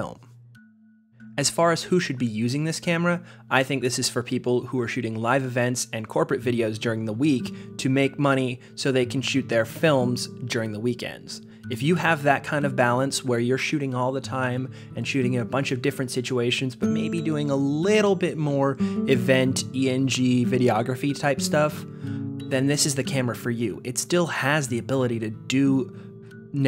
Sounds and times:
Speech: 0.0s - 0.3s, 1.4s - 21.8s, 22.5s - 25.9s
Music: 0.0s - 26.6s.

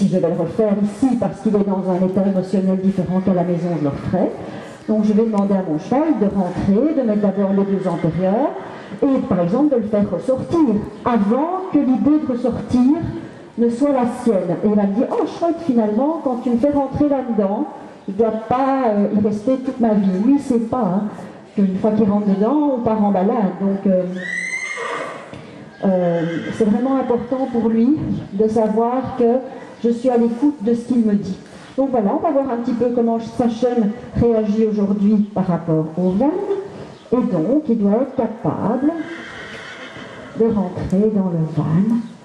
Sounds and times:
Speech: 0.0s - 24.2s, 25.8s - 39.1s, 40.4s - 42.2s
Horse: 5.0s - 17.5s, 21.8s - 31.4s.

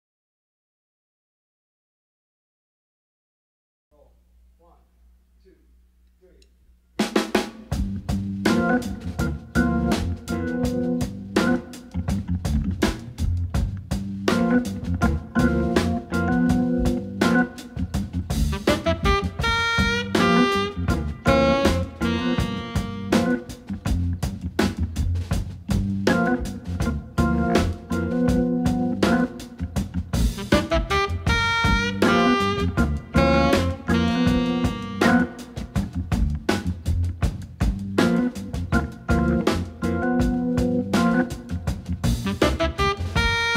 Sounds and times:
Drum: 7.0s - 43.5s
Keyboard (musical): 7.7s - 43.5s.

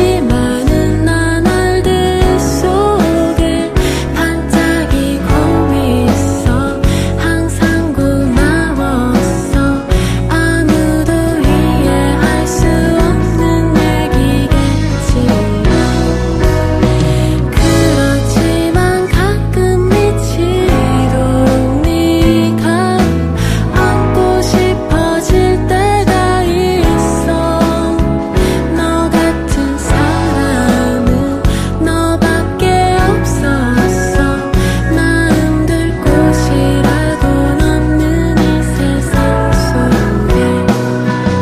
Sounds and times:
Music: 0.0s - 41.4s.

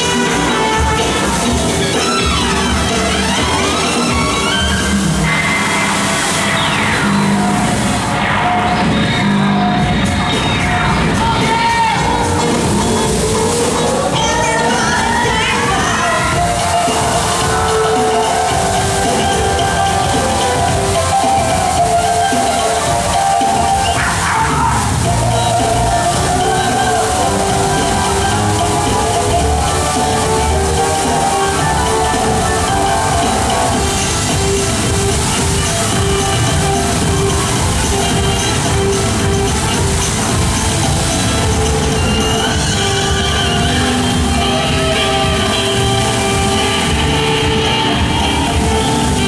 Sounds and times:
Music: 0.0s - 49.2s
Water: 0.0s - 49.2s.

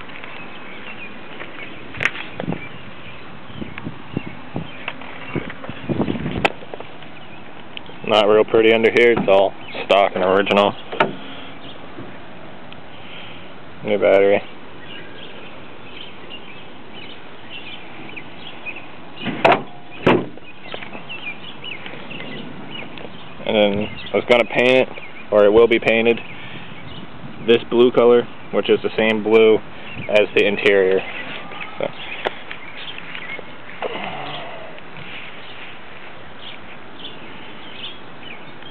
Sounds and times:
Outside, rural or natural: 0.0s - 38.7s
Speech: 8.0s - 10.8s, 13.8s - 14.5s, 23.4s - 26.2s, 27.5s - 31.1s.

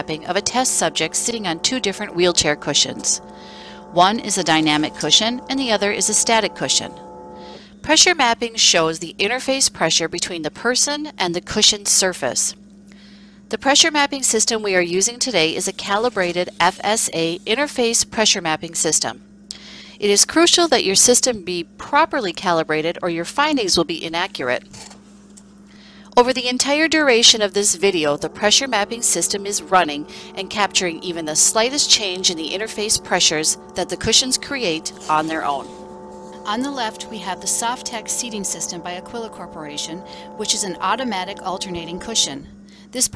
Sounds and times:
Speech: 0.0s - 3.2s, 4.0s - 7.0s, 7.8s - 12.6s, 13.5s - 19.2s, 20.0s - 24.7s, 26.2s - 35.7s, 36.5s - 43.1s.

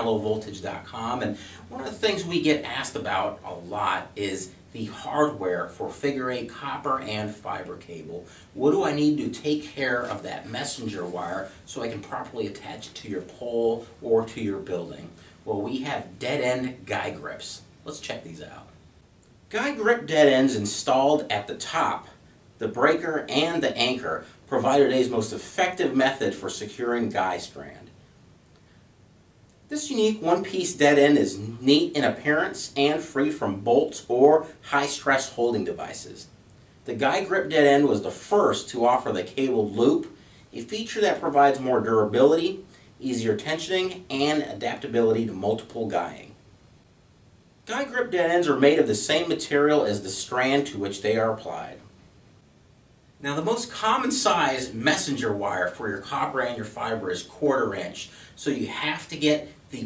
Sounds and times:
Speech: 0.0s - 18.8s, 19.5s - 28.0s, 29.7s - 36.3s, 36.9s - 46.4s, 47.7s - 51.9s, 53.2s - 59.8s.

